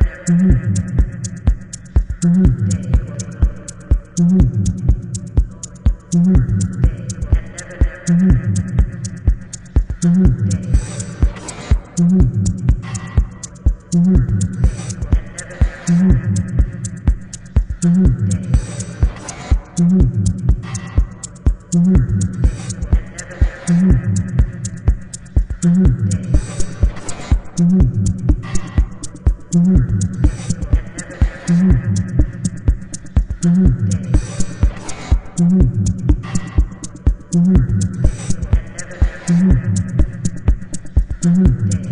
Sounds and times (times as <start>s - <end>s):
Electronic music: 0.0s - 41.9s.